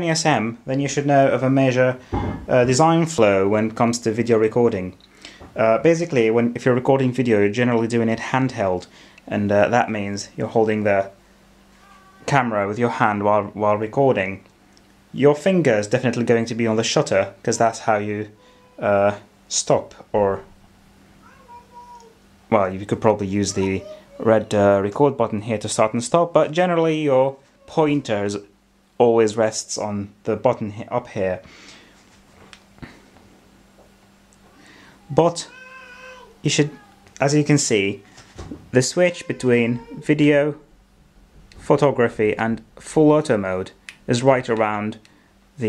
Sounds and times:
Speech: 0.0s - 5.0s, 5.6s - 11.2s, 12.2s - 14.5s, 15.2s - 20.5s, 21.9s - 31.5s, 35.1s - 35.6s, 36.4s - 38.0s, 38.8s - 40.7s, 41.6s - 45.0s.

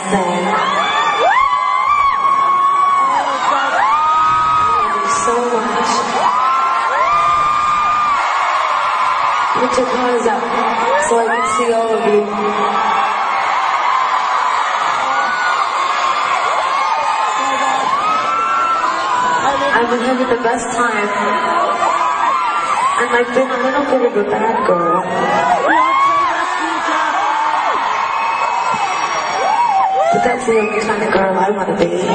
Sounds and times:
Whoop: 0.3s - 5.3s, 6.2s - 9.6s, 10.8s - 19.5s, 21.1s - 23.2s, 24.6s - 30.8s
Speech: 19.4s - 21.6s, 23.0s - 25.1s, 30.1s - 32.1s.

